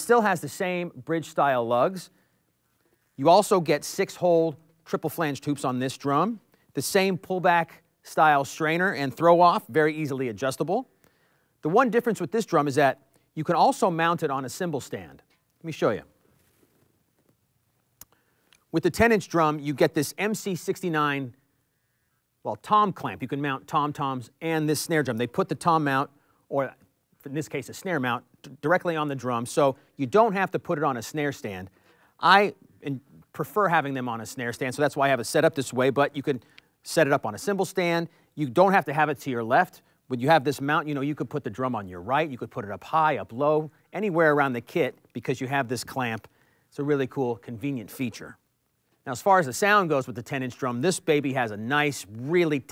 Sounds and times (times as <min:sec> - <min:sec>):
Speech: 0:00.0 - 0:02.1, 0:03.2 - 0:10.9, 0:11.6 - 0:16.2, 0:18.7 - 0:21.4, 0:22.4 - 0:48.4, 0:49.0 - 0:52.7.